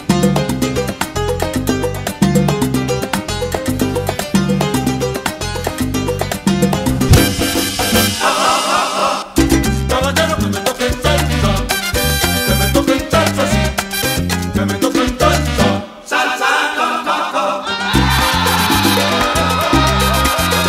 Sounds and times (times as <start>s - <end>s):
Salsa music: 0.0s - 20.6s
Ska: 0.0s - 20.6s.